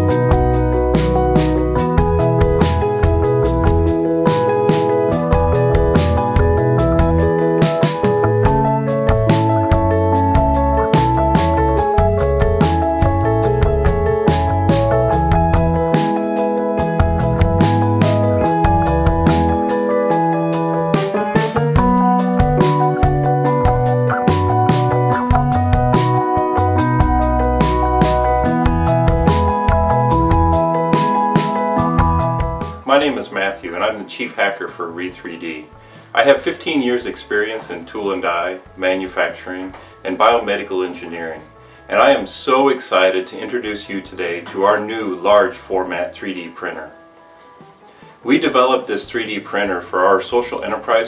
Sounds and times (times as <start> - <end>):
Music: 0.0 - 51.0.